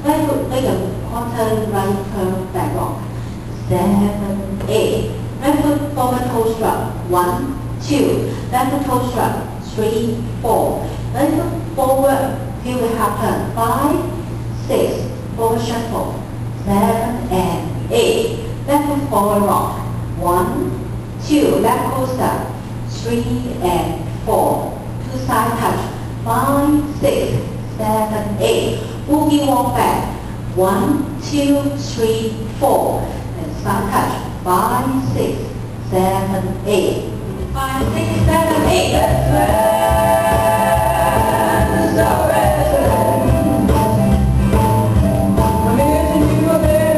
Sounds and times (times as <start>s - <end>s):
Speech: 0.0s - 39.6s.